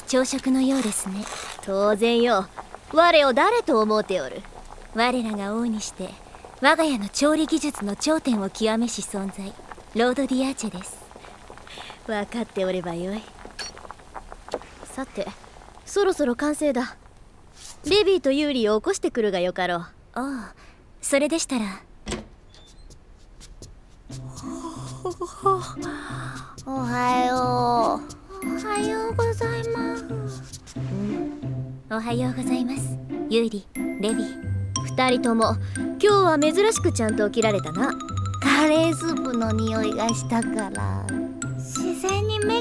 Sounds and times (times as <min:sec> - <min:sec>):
Speech: 0:00.0 - 0:04.4, 0:05.0 - 0:11.0, 0:12.1 - 0:13.3, 0:14.9 - 0:17.0, 0:17.8 - 0:21.8, 0:26.7 - 0:30.4, 0:31.9 - 0:41.1, 0:41.7 - 0:42.6
Music: 0:24.1 - 0:42.6.